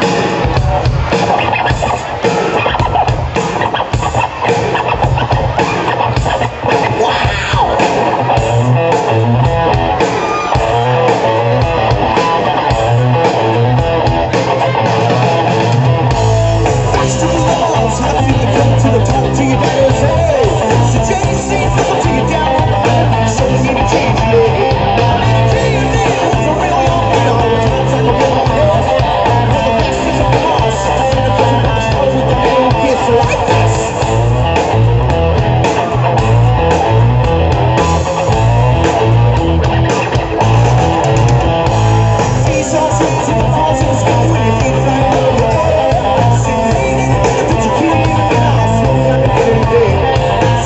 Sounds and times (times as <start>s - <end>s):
Rock and roll: 0.0s - 50.6s
Singing: 16.9s - 34.0s, 42.5s - 50.6s.